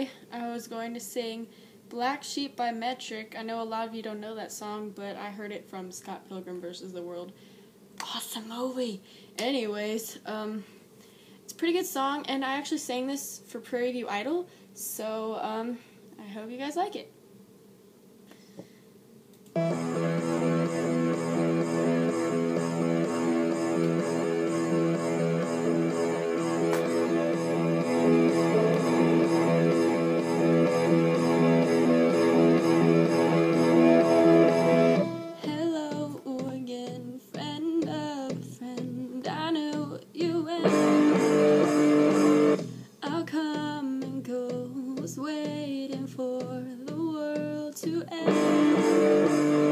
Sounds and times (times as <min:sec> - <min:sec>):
Tapping (guitar technique): 0:19.6 - 0:38.9, 0:40.6 - 0:42.8, 0:46.4 - 0:49.7.